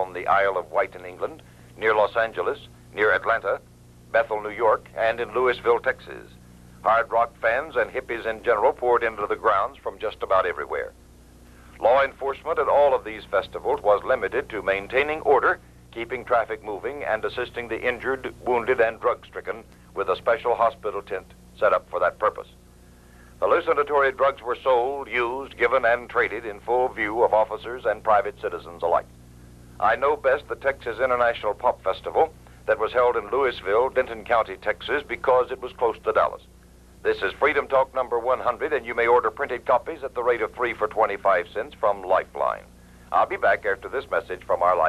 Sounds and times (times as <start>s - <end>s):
Speech: 0.0s - 11.0s, 11.8s - 22.6s, 23.4s - 29.1s, 29.8s - 44.8s.